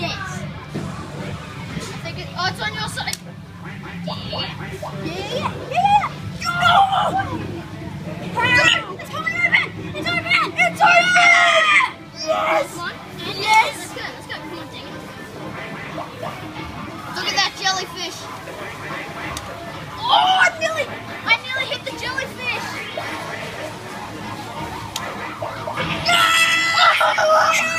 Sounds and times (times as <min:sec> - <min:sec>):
Child speech, kid speaking: 0:00.0 - 0:00.6, 0:01.8 - 0:03.2, 0:04.1 - 0:07.5, 0:08.3 - 0:15.1, 0:17.1 - 0:18.3, 0:20.0 - 0:23.1
Music: 0:00.0 - 0:27.7
Children playing: 0:04.3 - 0:18.6, 0:19.8 - 0:27.7.